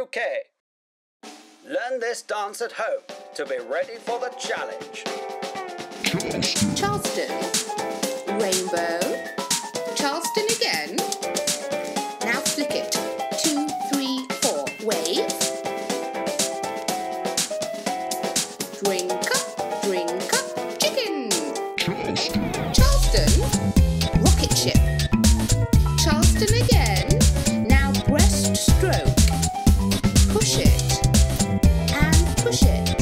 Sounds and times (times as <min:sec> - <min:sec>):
Speech: 0:00.0 - 0:00.5, 0:01.7 - 0:05.0, 0:06.0 - 0:07.5, 0:08.3 - 0:09.2, 0:10.0 - 0:11.1, 0:12.2 - 0:15.4, 0:18.8 - 0:23.5, 0:24.2 - 0:24.9, 0:26.0 - 0:29.2, 0:30.3 - 0:31.0, 0:31.9 - 0:33.0
Music: 0:01.2 - 0:33.0.